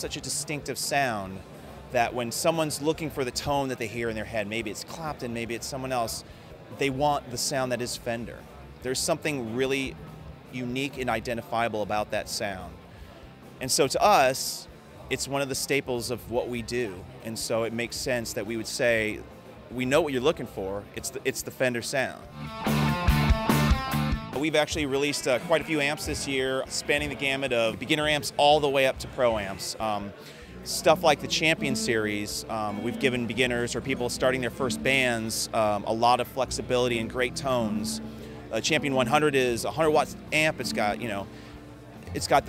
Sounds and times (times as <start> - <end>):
Speech: 0.0 - 12.8, 13.6 - 22.3, 24.4 - 41.3, 42.0 - 42.4
Music: 0.0 - 42.4.